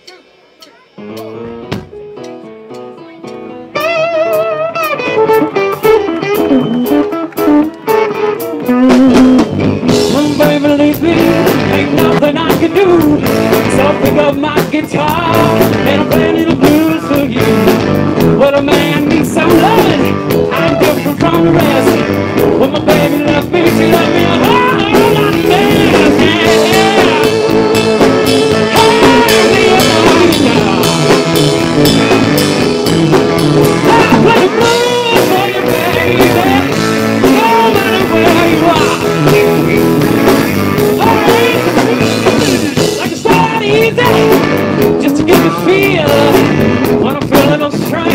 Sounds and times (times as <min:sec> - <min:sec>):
Electric guitar: 0:00.7 - 0:48.1.